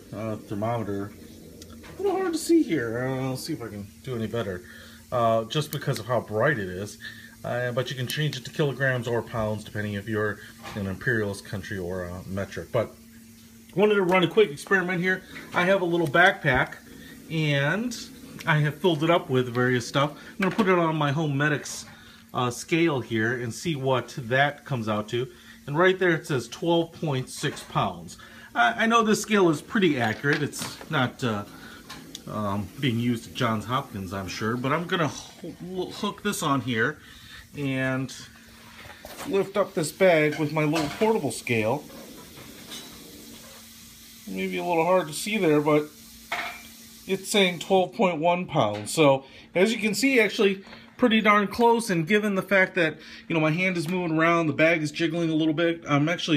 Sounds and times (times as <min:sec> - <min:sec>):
Speech: 0:00.0 - 0:01.2, 0:02.0 - 0:13.0, 0:13.7 - 0:31.6, 0:32.2 - 0:38.4, 0:39.2 - 0:41.9, 0:44.2 - 0:45.9, 0:47.1 - 0:56.3
Frying (food): 0:00.0 - 0:56.3.